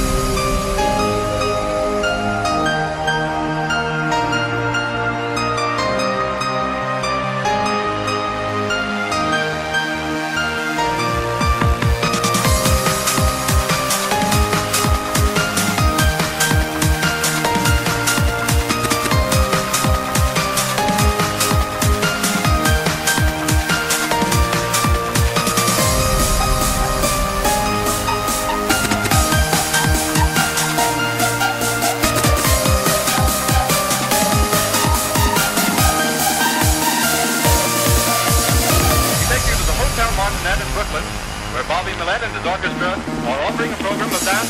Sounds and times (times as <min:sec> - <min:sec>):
Electronica: 0:00.0 - 0:44.5.